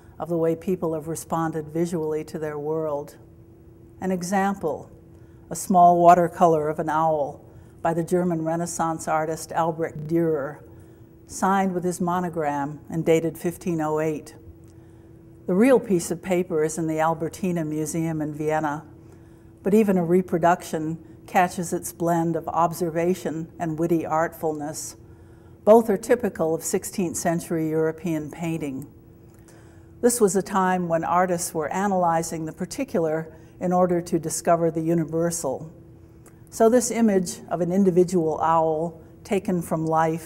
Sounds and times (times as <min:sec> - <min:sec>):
Speech: 0:00.2 - 0:03.2, 0:04.0 - 0:04.9, 0:05.5 - 0:10.6, 0:11.3 - 0:14.4, 0:15.5 - 0:18.9, 0:19.6 - 0:25.0, 0:25.7 - 0:28.9, 0:30.0 - 0:35.7, 0:36.5 - 0:40.2.